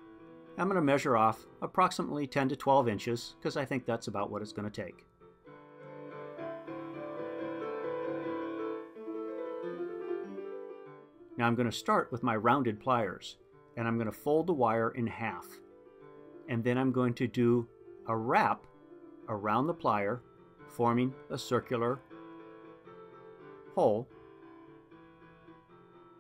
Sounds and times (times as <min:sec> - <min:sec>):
Keyboard (musical): 0:00.0 - 0:26.2
Speech: 0:00.6 - 0:05.0, 0:11.4 - 0:15.6, 0:16.5 - 0:18.7, 0:19.3 - 0:20.2, 0:20.8 - 0:22.0, 0:23.8 - 0:24.1.